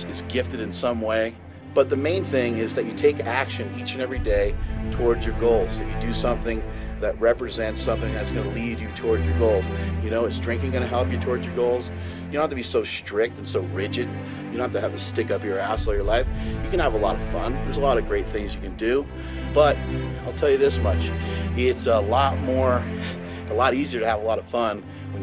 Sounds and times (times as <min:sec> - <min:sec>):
Music: 0:00.0 - 0:25.2
Speech: 0:00.0 - 0:25.2.